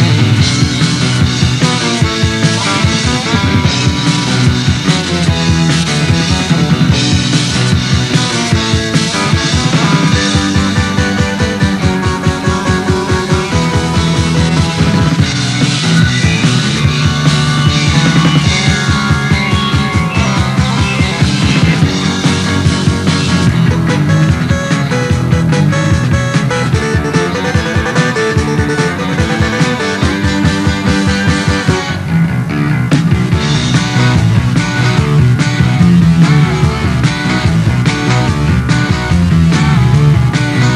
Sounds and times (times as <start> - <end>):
Music: 0.0 - 40.7.